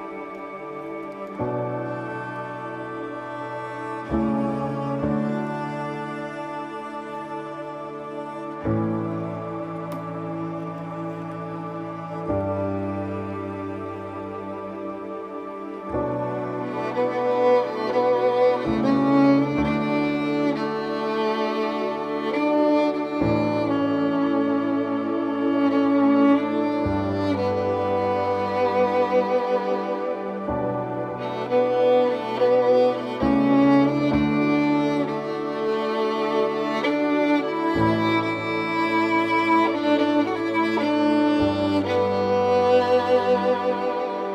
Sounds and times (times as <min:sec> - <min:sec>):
Cello: 0:00.0 - 0:44.3
Violin, fiddle: 0:00.0 - 0:44.3.